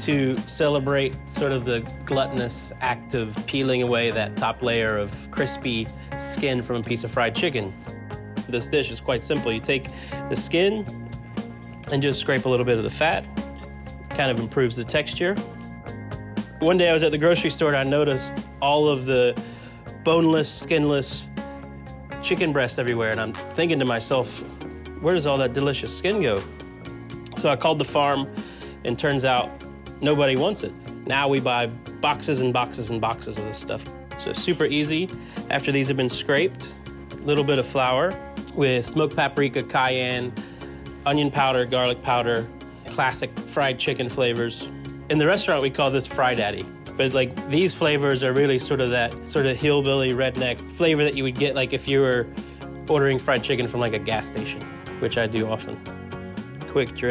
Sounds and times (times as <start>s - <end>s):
Speech: 0.0s - 7.8s, 8.5s - 10.9s, 11.9s - 13.3s, 14.1s - 15.4s, 16.6s - 19.4s, 20.0s - 21.3s, 22.2s - 26.5s, 27.3s - 40.4s, 41.0s - 52.3s, 52.9s - 55.8s, 56.6s - 57.1s
Music: 0.0s - 57.1s.